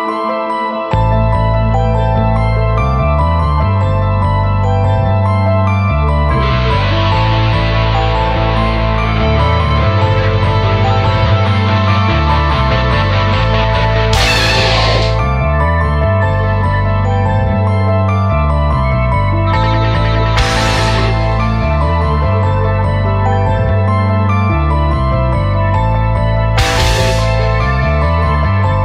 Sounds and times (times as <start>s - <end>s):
Music: 0.0s - 28.8s.